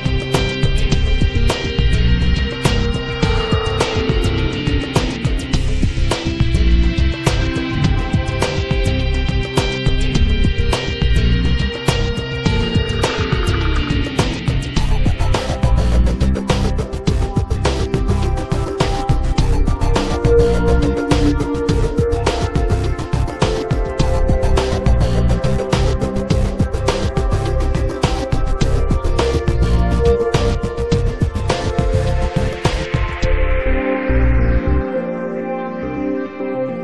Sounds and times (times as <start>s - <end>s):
Music: 0.0s - 36.8s.